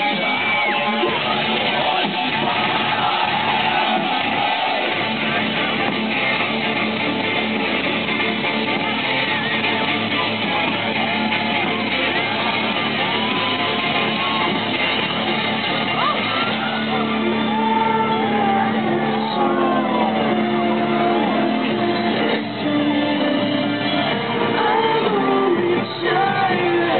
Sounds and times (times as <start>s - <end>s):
Music: 0.0s - 27.0s.